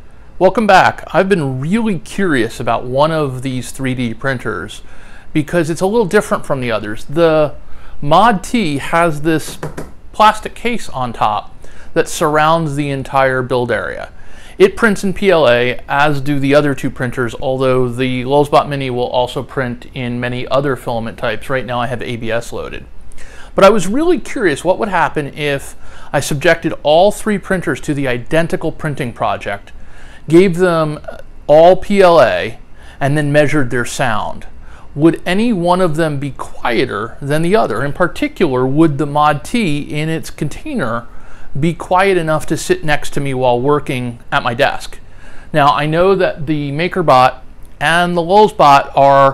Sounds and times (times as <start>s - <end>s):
Speech: 0.4s - 22.9s, 23.6s - 49.3s.